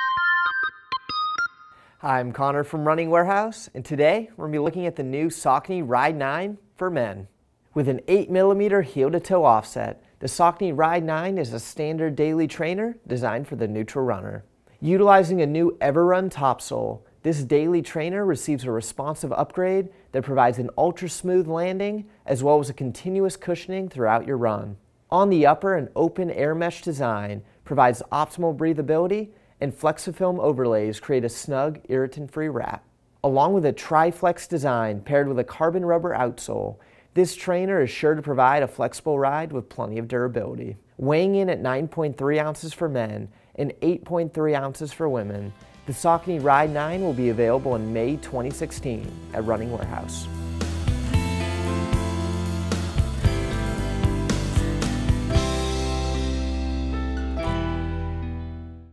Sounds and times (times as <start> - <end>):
Speech: 2.0 - 50.3.